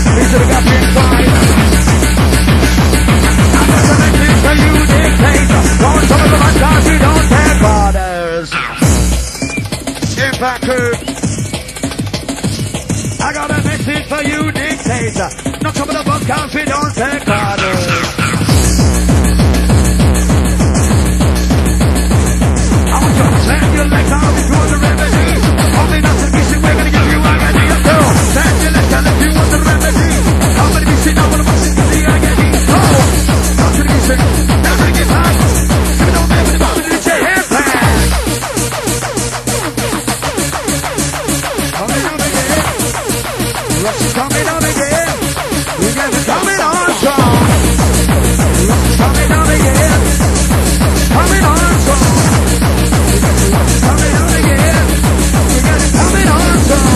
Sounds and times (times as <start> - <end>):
Techno: 0.0 - 56.9.